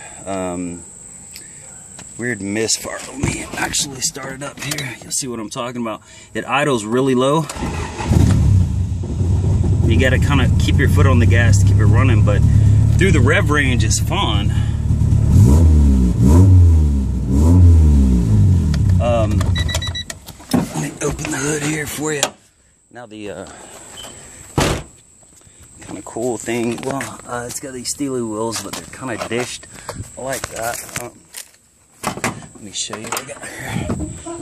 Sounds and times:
Speech: 0.2 - 0.8, 2.2 - 7.5, 9.9 - 14.7, 19.0 - 19.4, 20.7 - 23.6, 25.8 - 29.6, 30.2 - 31.2, 32.6 - 34.4
Car: 7.5 - 20.2.

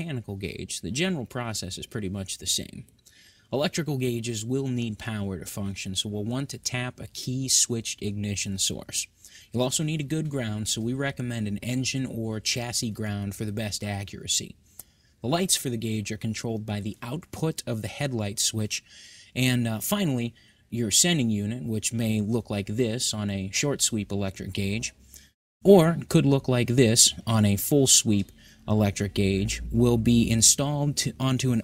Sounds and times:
Speech: 0.0 - 2.9, 3.5 - 14.6, 15.2 - 25.0, 25.6 - 31.6.

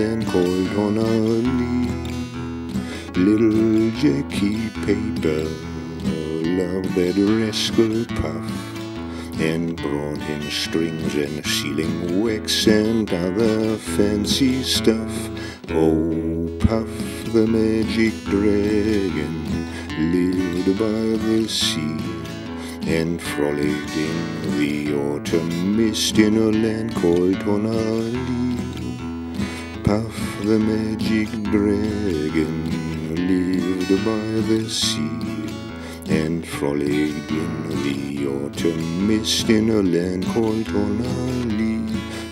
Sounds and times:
Music: 0.0 - 42.3.

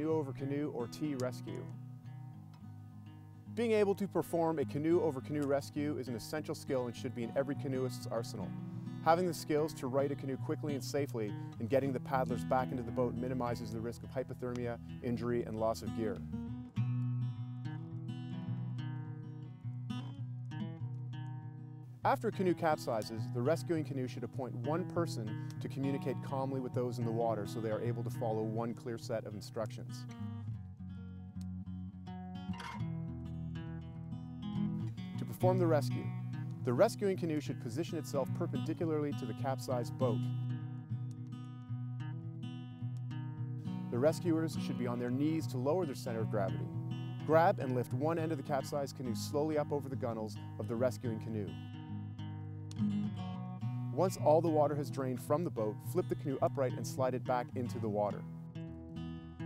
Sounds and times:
Speech: 0.0 - 1.8, 3.6 - 16.2, 22.1 - 30.1, 35.2 - 40.3, 43.9 - 51.6, 54.0 - 58.3
Music: 0.0 - 59.4.

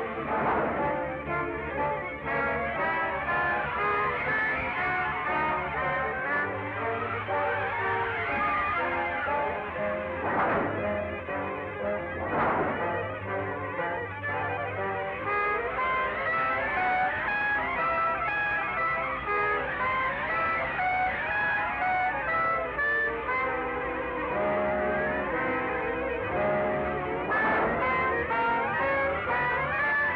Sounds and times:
Music: 0.0 - 30.1.

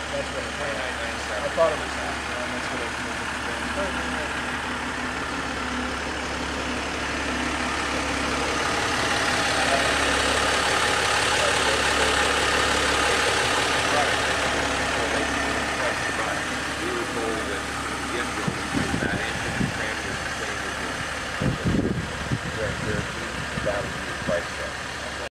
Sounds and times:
Speech: 0.0 - 4.4, 9.5 - 10.2, 11.3 - 25.3.

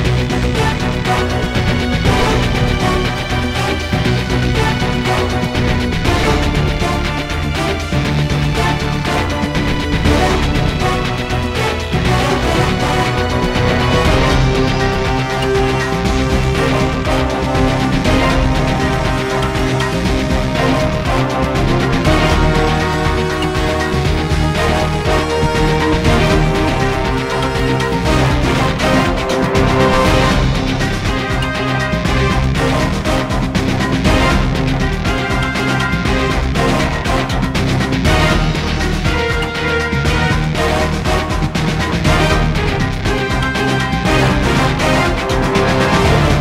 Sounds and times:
Soundtrack music: 0.0 - 46.4.

